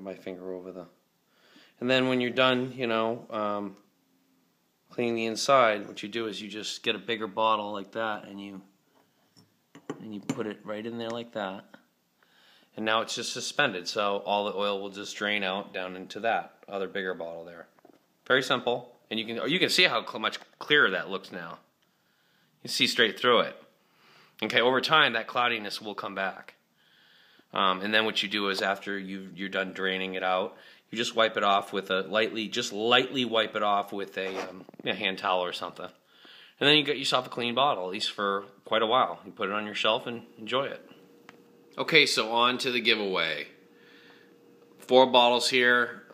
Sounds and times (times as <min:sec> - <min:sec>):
Speech: 0:00.0 - 0:01.0, 0:01.8 - 0:03.9, 0:04.9 - 0:08.7, 0:09.9 - 0:11.8, 0:12.8 - 0:21.7, 0:22.6 - 0:23.7, 0:24.4 - 0:26.6, 0:27.5 - 0:36.0, 0:36.6 - 0:41.0, 0:41.8 - 0:43.6, 0:44.8 - 0:46.1.